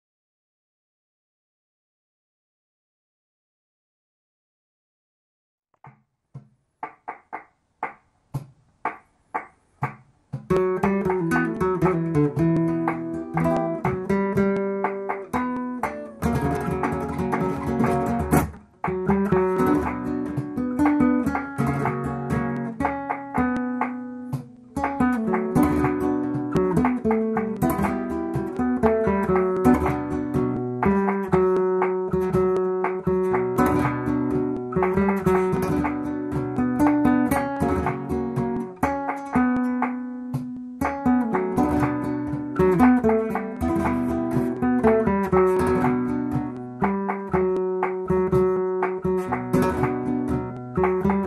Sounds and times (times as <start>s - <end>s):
Music: 6.8s - 51.2s.